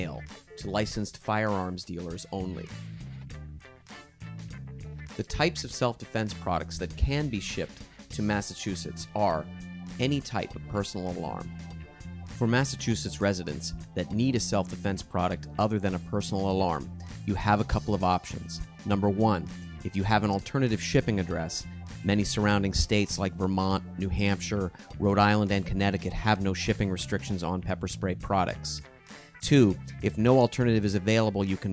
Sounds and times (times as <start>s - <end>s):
Speech: 0.0s - 2.8s, 5.2s - 11.5s, 12.4s - 28.8s, 29.4s - 31.7s
Music: 0.0s - 31.7s.